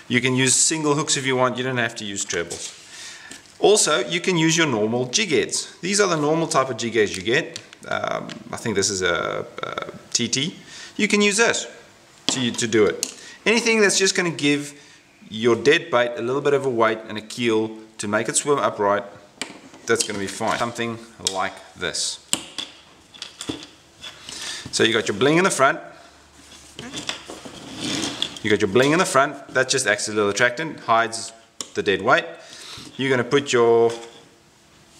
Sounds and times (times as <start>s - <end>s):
Inside, small room: 0.0s - 34.9s
Speech: 0.1s - 2.8s, 3.6s - 19.2s, 19.9s - 22.3s, 24.7s - 26.0s, 28.4s - 32.4s, 33.0s - 34.2s.